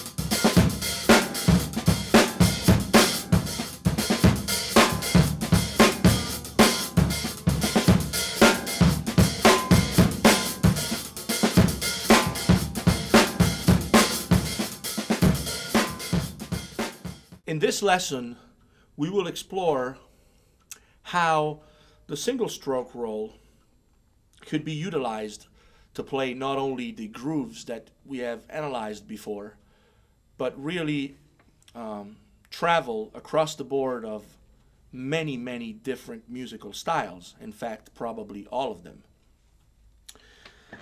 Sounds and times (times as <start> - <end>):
Speech: 17.5 - 20.1, 21.0 - 23.4, 24.4 - 29.6, 30.4 - 39.1.